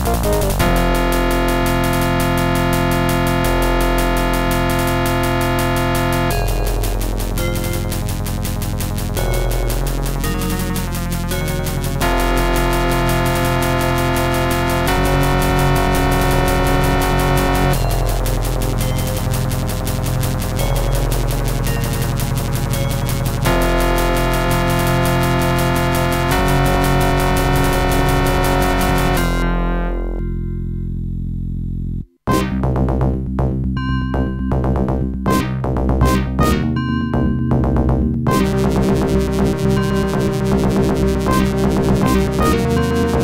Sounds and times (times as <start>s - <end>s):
Music: 0.0s - 43.2s.